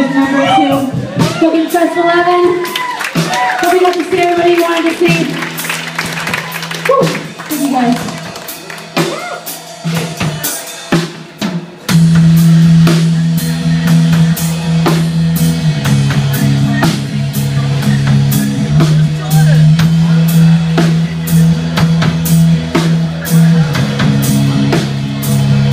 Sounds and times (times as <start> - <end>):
Music: 0.0 - 25.7.